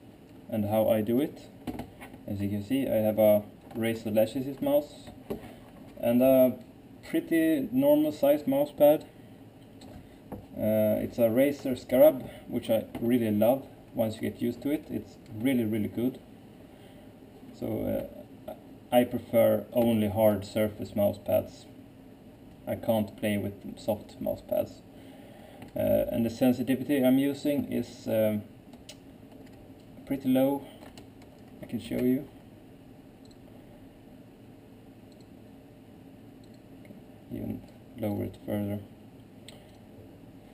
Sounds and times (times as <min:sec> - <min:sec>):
Speech: 0:00.5 - 0:01.6, 0:02.3 - 0:05.2, 0:06.0 - 0:09.1, 0:10.6 - 0:16.2, 0:17.6 - 0:21.8, 0:22.7 - 0:24.8, 0:25.8 - 0:28.5, 0:30.0 - 0:30.7, 0:31.6 - 0:32.4, 0:37.3 - 0:38.9.